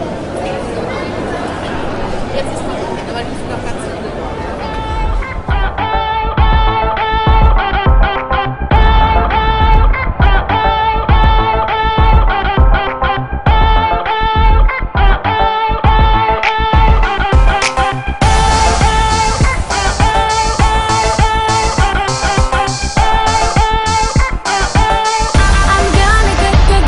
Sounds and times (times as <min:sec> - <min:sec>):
Speech: 0:00.0 - 0:05.4
Music: 0:04.6 - 0:26.8.